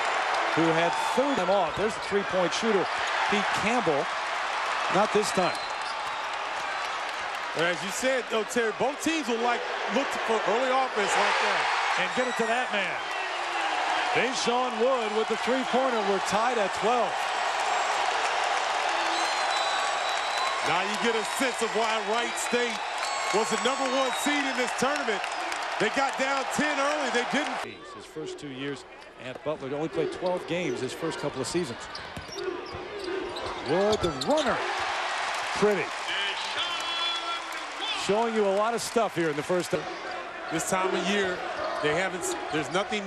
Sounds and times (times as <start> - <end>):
Speech: 0.6 - 4.1, 4.9 - 5.6, 7.6 - 13.0, 14.2 - 17.2, 20.6 - 25.2, 25.8 - 31.9, 33.6 - 34.6, 35.6 - 43.0.